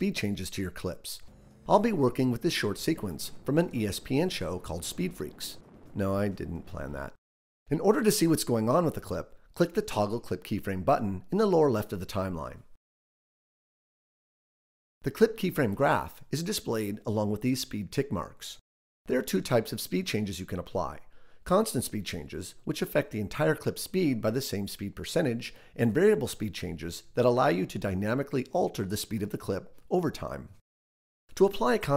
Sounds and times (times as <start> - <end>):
Speech: 0.0 - 12.7, 15.0 - 30.6, 31.3 - 31.9.